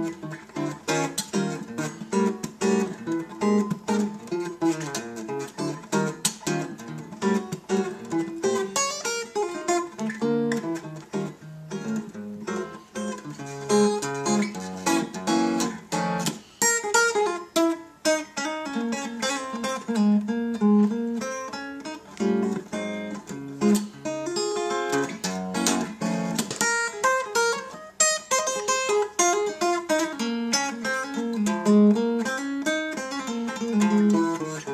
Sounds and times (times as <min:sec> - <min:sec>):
Acoustic guitar: 0:00.0 - 0:34.7.